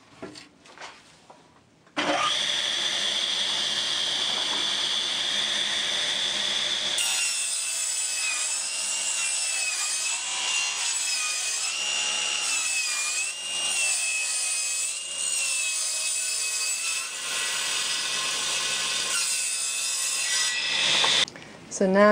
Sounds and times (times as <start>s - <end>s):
Sawing: 2.0s - 21.3s.